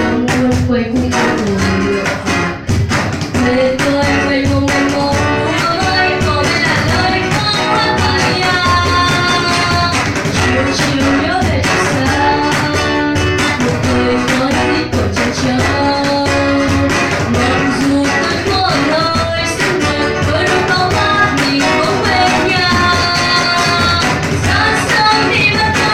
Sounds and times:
Acoustic guitar: 0:00.0 - 0:25.9.

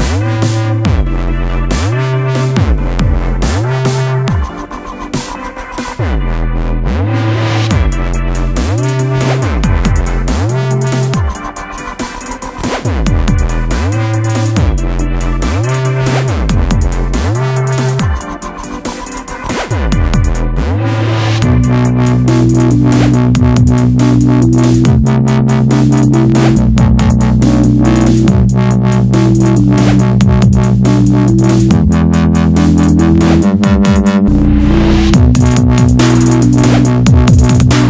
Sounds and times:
Dubstep: 0:00.0 - 0:37.9
Sampler: 0:07.7 - 0:37.9.

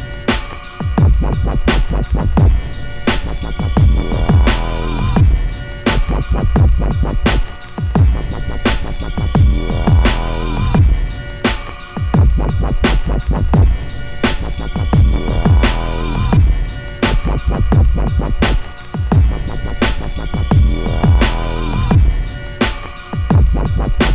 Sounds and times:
Dubstep: 0:00.0 - 0:24.1.

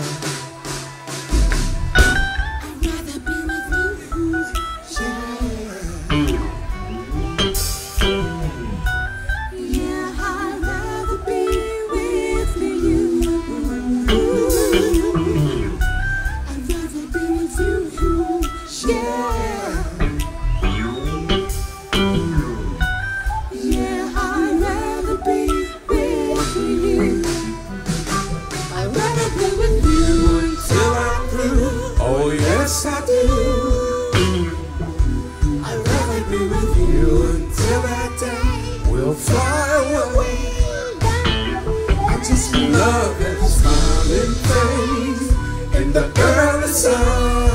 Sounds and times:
Music: 0:00.0 - 0:47.5.

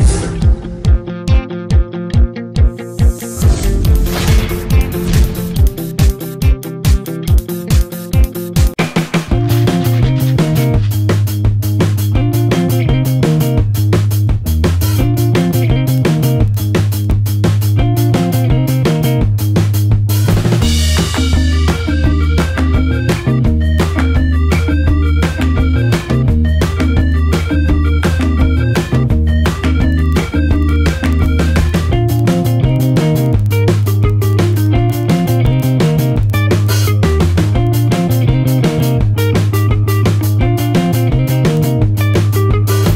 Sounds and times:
Music: 0:00.0 - 0:42.9.

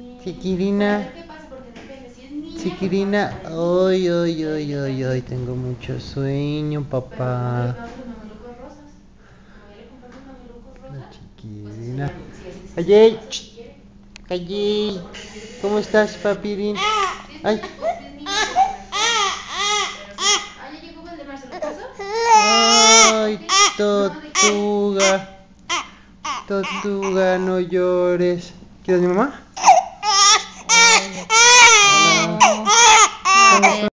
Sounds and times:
Baby cry, infant cry: 0:16.8 - 0:17.2, 0:18.3 - 0:20.6, 0:21.5 - 0:27.3, 0:29.6 - 0:33.9
Speech: 0:33.4 - 0:33.9.

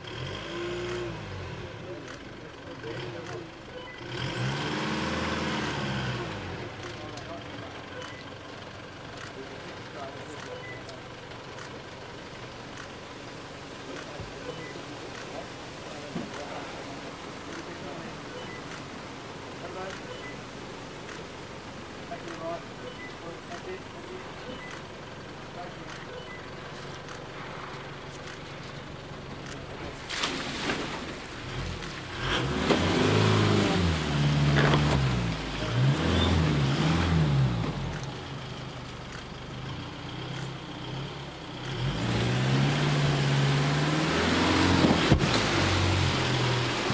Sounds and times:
Speech: 0:01.6 - 0:03.8, 0:06.2 - 0:08.6, 0:09.2 - 0:11.2, 0:13.8 - 0:18.6, 0:19.6 - 0:20.4, 0:22.1 - 0:24.8, 0:25.5 - 0:26.4.

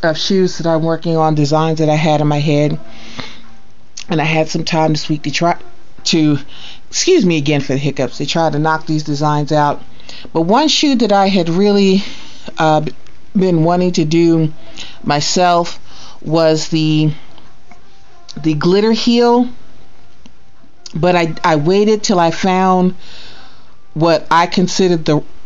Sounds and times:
Speech: 0:00.0 - 0:02.8, 0:04.0 - 0:17.2, 0:18.3 - 0:19.6, 0:20.9 - 0:23.0, 0:24.0 - 0:25.3.

